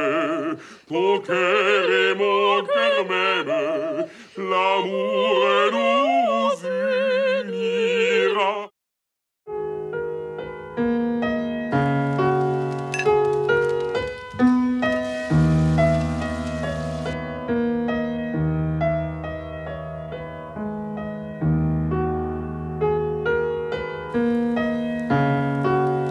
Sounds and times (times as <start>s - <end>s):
Music: 9.5s - 26.1s.